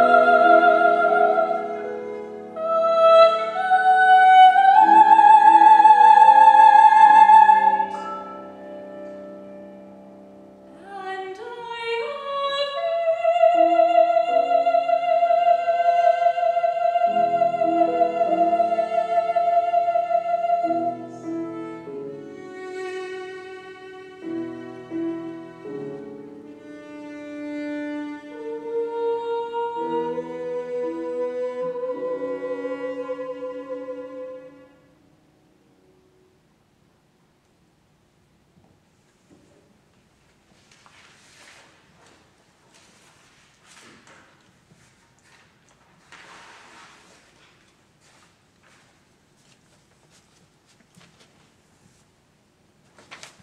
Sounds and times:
Cello: 0.0 - 35.2
Piano: 0.0 - 53.4.

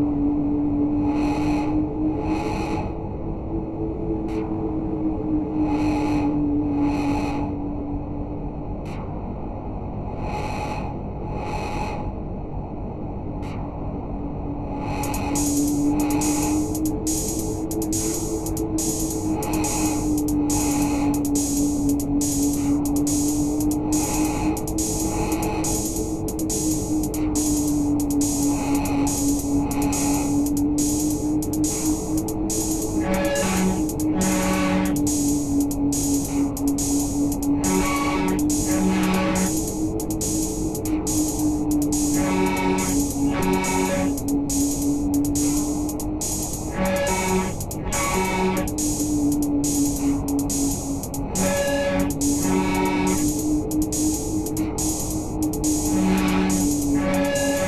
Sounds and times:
Electronic music: 14.9 - 57.6.

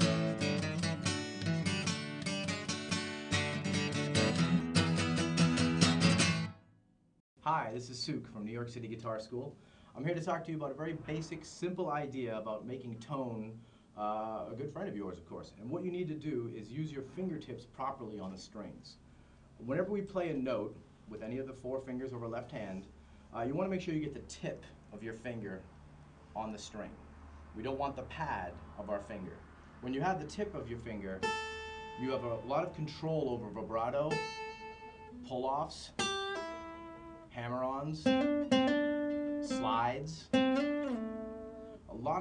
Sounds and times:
Acoustic guitar: 0.0 - 6.8, 30.4 - 42.2
Speech: 7.4 - 19.0, 19.6 - 25.7, 26.4 - 27.0, 27.6 - 31.3, 32.0 - 34.2, 35.2 - 36.0, 37.3 - 38.1, 39.4 - 40.4, 41.9 - 42.2.

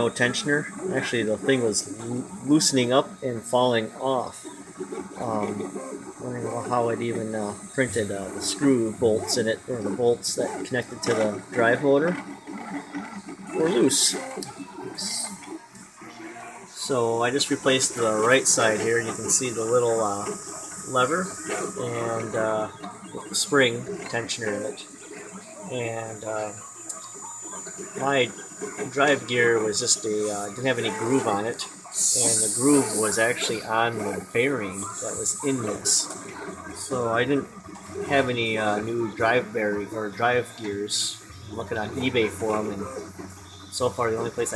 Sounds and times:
Speech: 0.0 - 4.4, 5.2 - 12.3, 13.5 - 14.3, 14.9 - 15.4, 16.8 - 24.9, 25.7 - 26.6, 28.0 - 36.1, 36.8 - 43.1, 43.7 - 44.5.

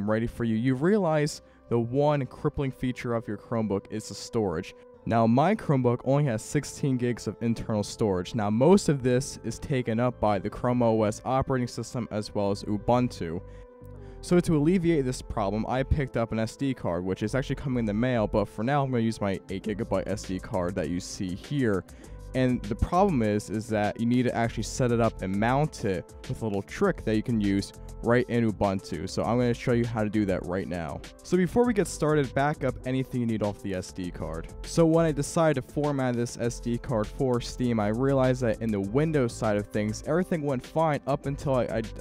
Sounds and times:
Speech: 0.0 - 13.4, 14.2 - 21.8, 22.4 - 42.0
Music: 0.0 - 42.0.

